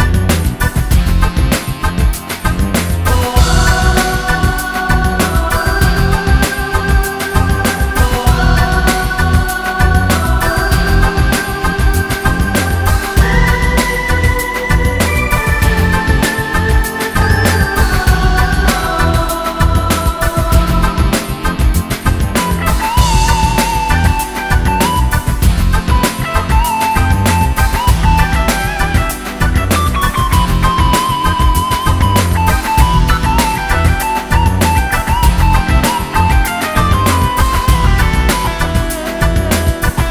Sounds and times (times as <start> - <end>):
Music: 0.0 - 40.1.